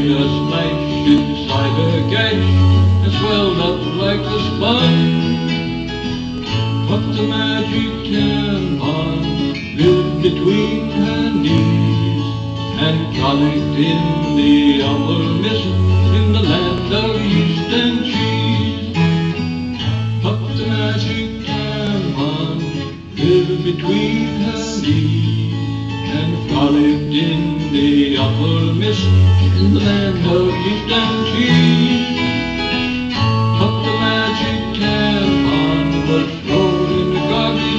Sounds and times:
Country: 0.0 - 37.7
Guitar: 0.0 - 37.7
Singing: 6.9 - 19.2, 19.8 - 32.4, 33.6 - 37.7.

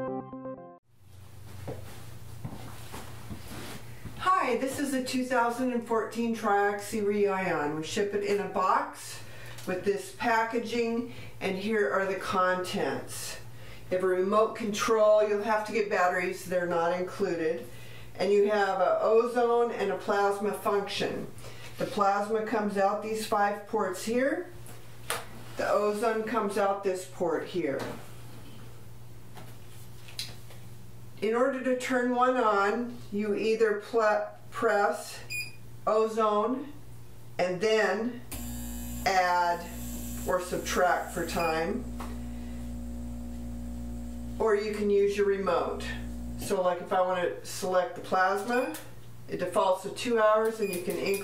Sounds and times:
Speech: 4.2 - 24.6, 25.6 - 28.0, 31.2 - 36.8, 37.4 - 38.3, 39.1 - 39.7, 40.3 - 41.9, 44.4 - 51.2.

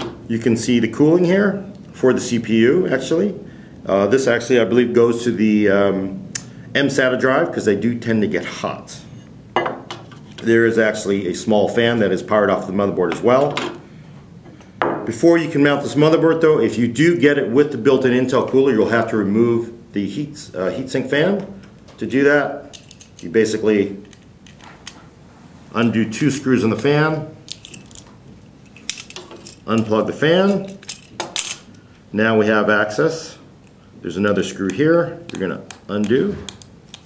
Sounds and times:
Inside, small room: 0.0 - 37.0
Speech: 0.3 - 6.2, 6.8 - 9.1, 10.4 - 13.6, 15.0 - 24.1, 25.7 - 27.4, 29.6 - 30.8, 32.1 - 36.5.

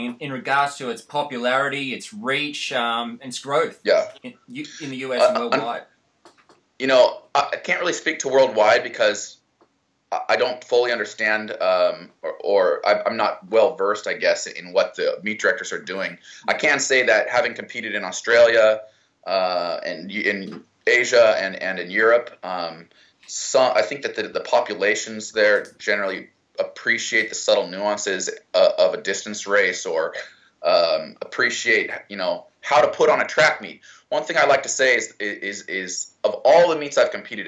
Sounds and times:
Male speech, man speaking: 0.0 - 5.8, 6.8 - 9.4, 10.1 - 37.4
Inside, small room: 0.0 - 37.4.

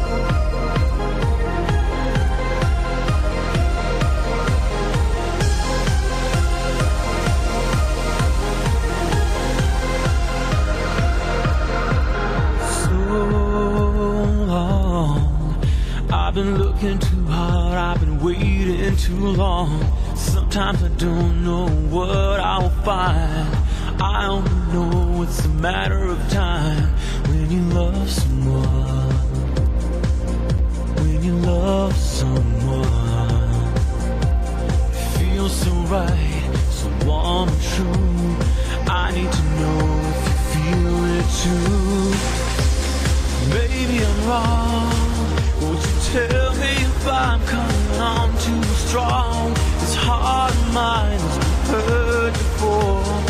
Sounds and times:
Music: 0.0 - 53.3.

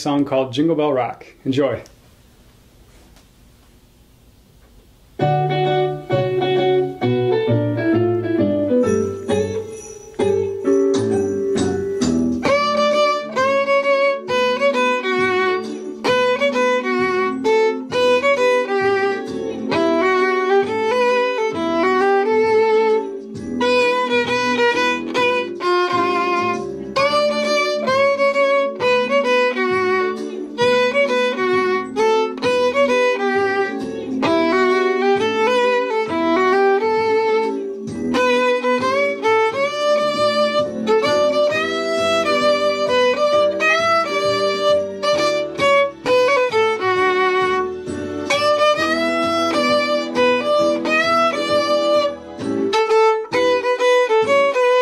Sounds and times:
Music: 4.8 - 54.8.

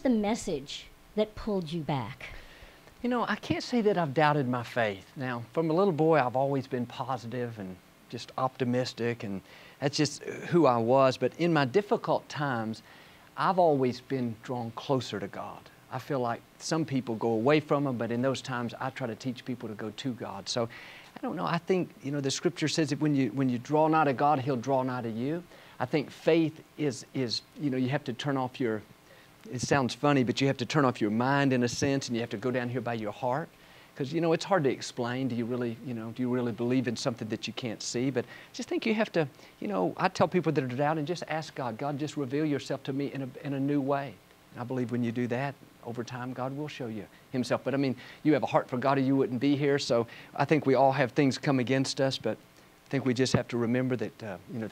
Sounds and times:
Speech: 0.0 - 2.3, 3.0 - 12.8, 13.4 - 28.9, 29.5 - 54.7.

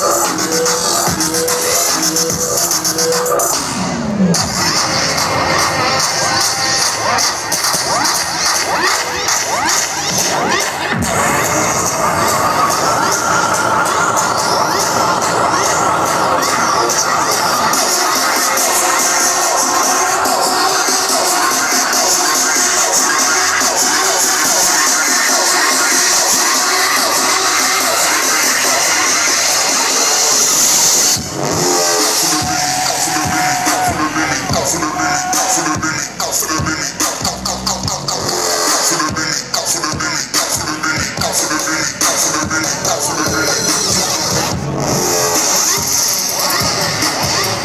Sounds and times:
Dubstep: 0.0 - 47.6.

